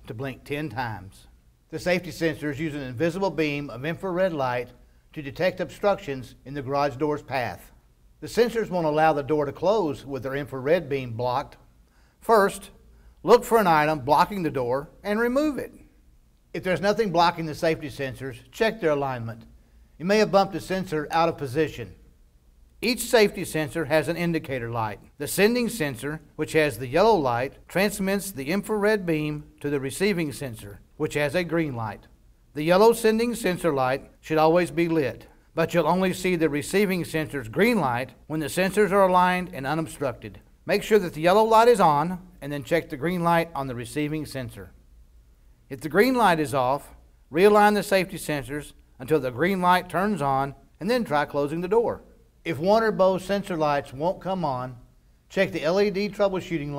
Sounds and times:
Speech: 0.0 - 11.6, 12.2 - 15.9, 16.6 - 22.0, 22.8 - 44.8, 45.7 - 56.7.

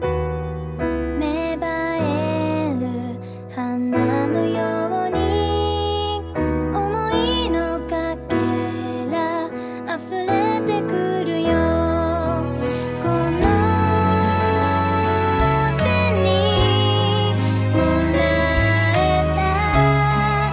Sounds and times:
Guitar: 0.0 - 20.5.

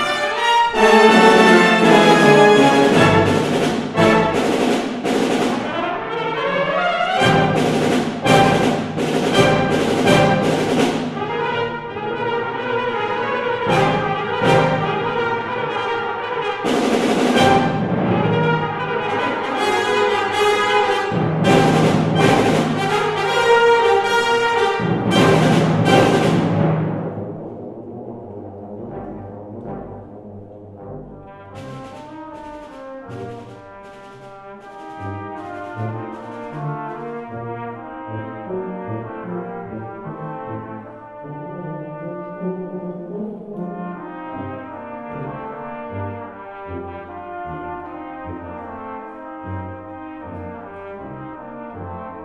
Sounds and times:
Brass instrument: 0.0 - 52.2
Classical music: 0.0 - 52.2
Orchestra: 0.0 - 52.2
Timpani: 0.0 - 52.2.

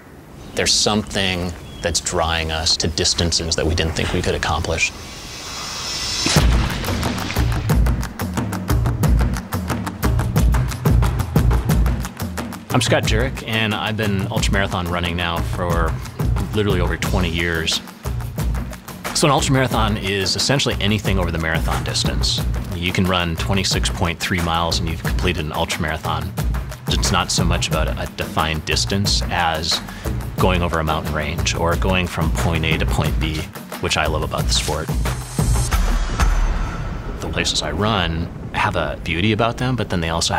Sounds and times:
Outside, rural or natural: 0.0 - 40.3
Speech: 0.6 - 5.0, 12.7 - 17.9, 19.1 - 34.9, 37.2 - 40.3
Music: 3.2 - 38.0.

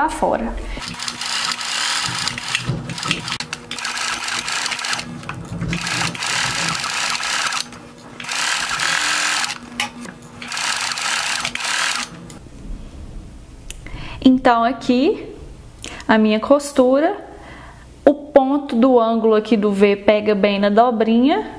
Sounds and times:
Speech: 0.0 - 0.8, 14.2 - 15.4, 16.1 - 17.3, 18.1 - 21.5
Sewing machine: 0.8 - 12.2.

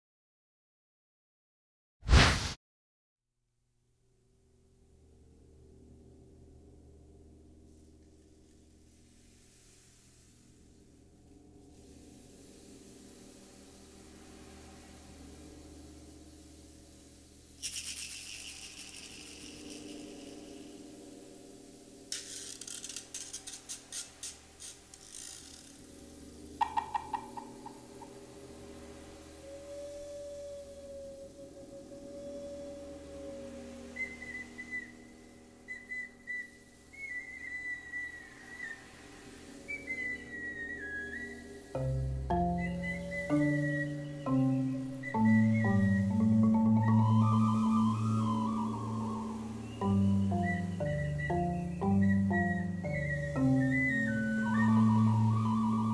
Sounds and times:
Flute: 26.6 - 55.9
Whistle: 29.4 - 55.9.

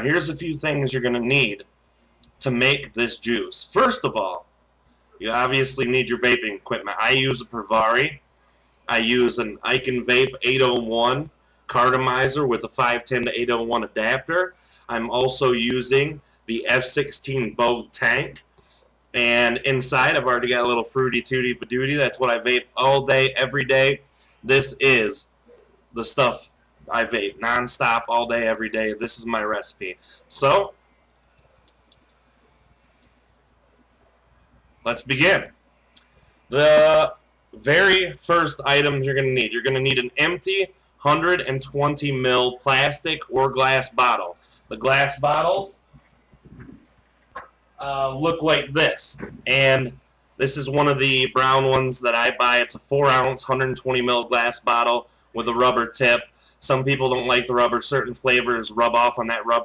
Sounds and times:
Speech: 0.0 - 1.6, 2.3 - 4.4, 5.2 - 8.2, 8.9 - 18.4, 19.2 - 25.2, 26.0 - 30.7, 34.9 - 35.5, 36.5 - 45.8, 47.8 - 59.6.

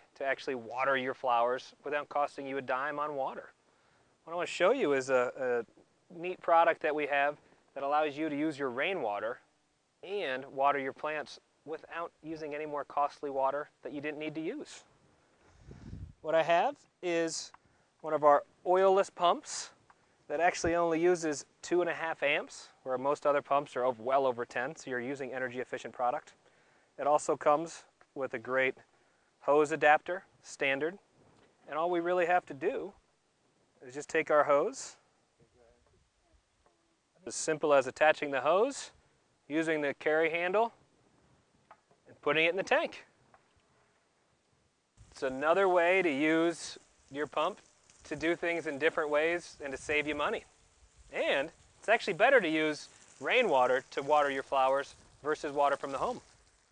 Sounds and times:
Speech: 0.0 - 3.6, 4.2 - 14.9, 16.2 - 26.4, 27.0 - 28.8, 29.4 - 31.0, 31.6 - 33.0, 33.8 - 35.8, 37.2 - 40.8, 42.0 - 43.1, 45.2 - 50.5, 51.1 - 56.2.

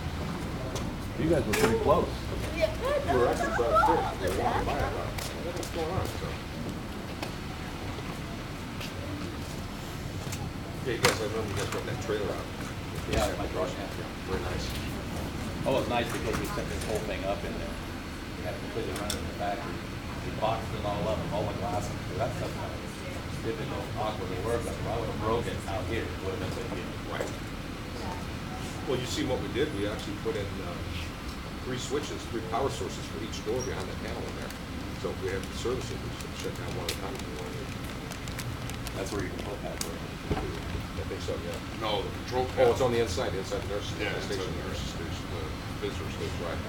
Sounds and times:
Speech: 1.2 - 6.4, 10.8 - 17.8, 18.4 - 27.4, 28.0 - 38.1, 39.0 - 46.6.

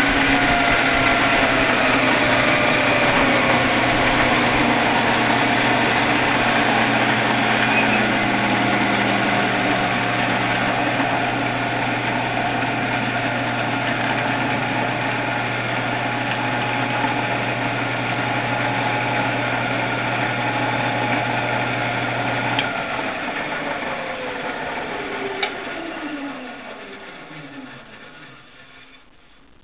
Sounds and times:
Medium engine (mid frequency): 0.0 - 29.4.

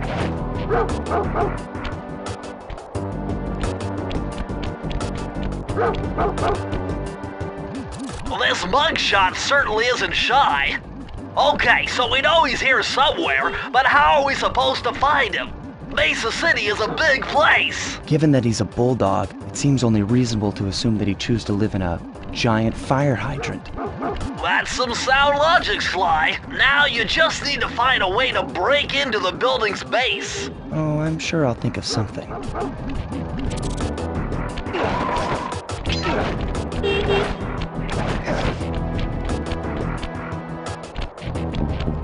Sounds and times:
Bow-wow: 0.7 - 1.6, 5.8 - 6.6, 23.4 - 24.3
Speech: 8.3 - 10.8, 11.4 - 23.7, 24.4 - 32.4.

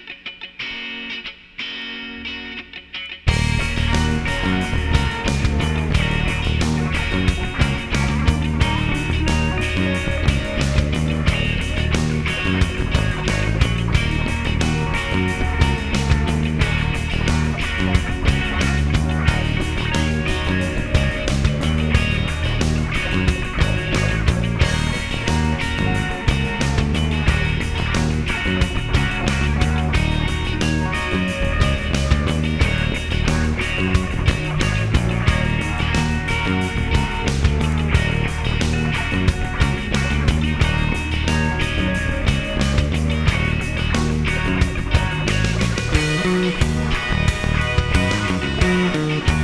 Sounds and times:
Music: 0.0 - 49.4.

